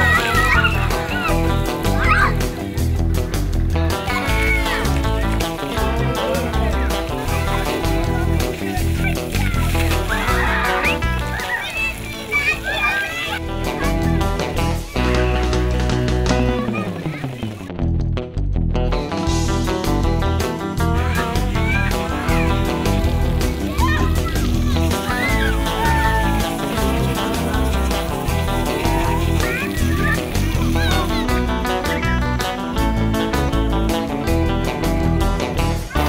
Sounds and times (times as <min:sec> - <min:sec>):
Water: 0:00.0 - 0:15.6, 0:16.2 - 0:17.8, 0:21.0 - 0:32.6
Music: 0:00.0 - 0:36.0.